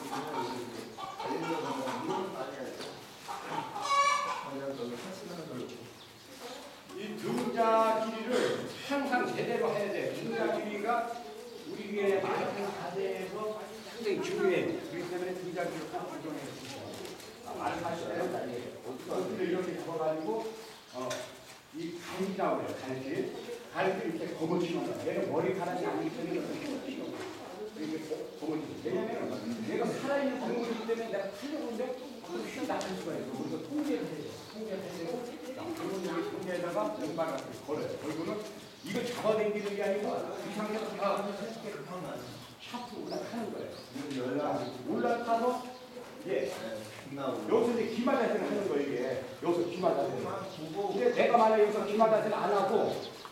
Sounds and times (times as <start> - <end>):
Speech: 4.3 - 53.2.